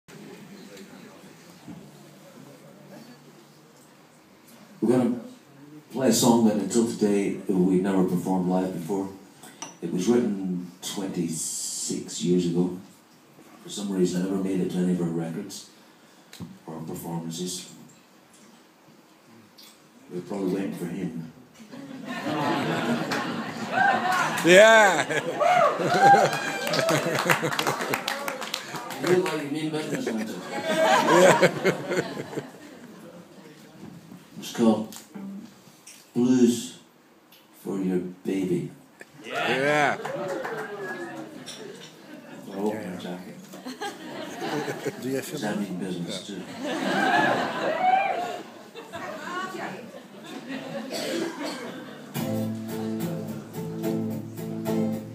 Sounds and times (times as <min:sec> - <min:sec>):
Speech: 0:04.8 - 0:09.2, 0:09.8 - 0:12.9, 0:13.6 - 0:15.7, 0:16.6 - 0:17.9, 0:20.1 - 0:21.4, 0:28.8 - 0:30.8, 0:33.0 - 0:35.4, 0:36.1 - 0:36.9, 0:37.6 - 0:40.1, 0:42.4 - 0:43.4, 0:44.9 - 0:46.5.